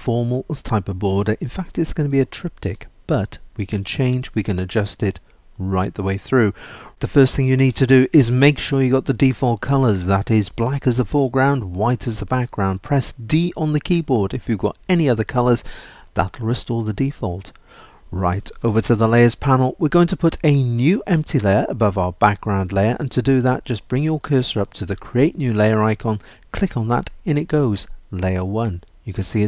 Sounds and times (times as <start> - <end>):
Speech: 0.0 - 29.4.